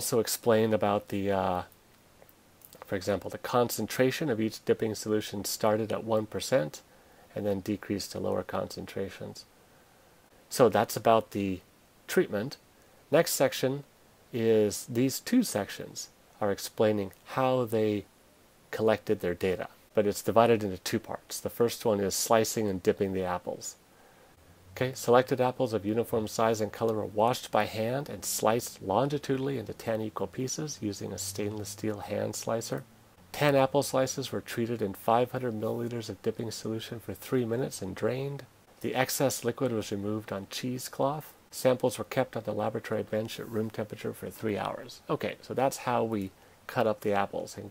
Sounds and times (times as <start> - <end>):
Speech: 0.0 - 1.8, 2.7 - 9.5, 10.5 - 18.1, 18.7 - 23.8, 24.8 - 47.7.